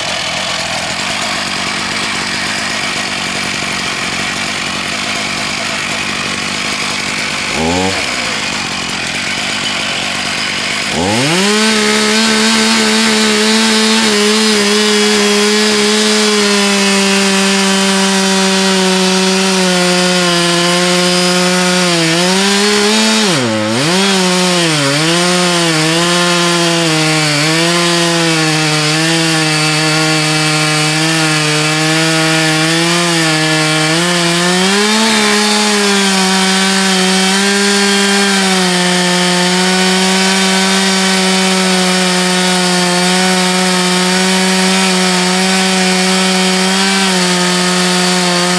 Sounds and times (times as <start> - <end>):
Power tool: 0.0 - 48.5.